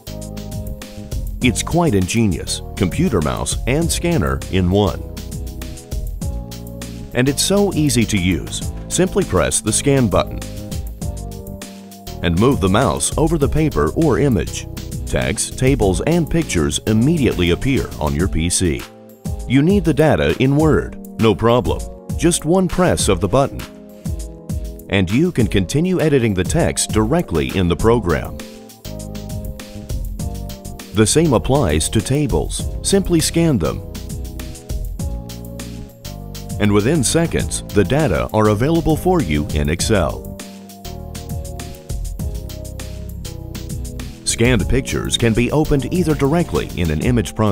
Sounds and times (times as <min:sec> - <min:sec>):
Music: 0:00.0 - 0:47.5
Speech: 0:01.4 - 0:05.0, 0:07.1 - 0:10.4, 0:12.2 - 0:18.9, 0:19.5 - 0:23.7, 0:24.9 - 0:28.4, 0:31.0 - 0:33.8, 0:36.6 - 0:40.3, 0:44.2 - 0:47.5.